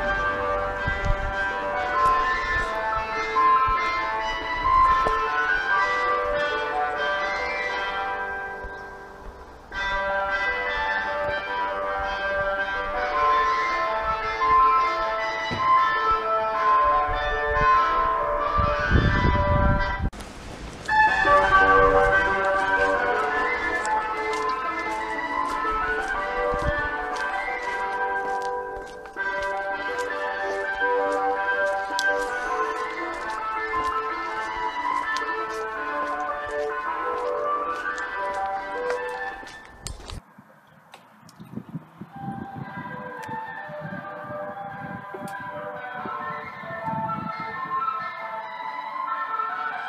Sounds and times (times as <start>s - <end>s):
Ice cream truck, ice cream van: 0.0s - 20.1s, 20.9s - 39.9s, 42.1s - 49.8s.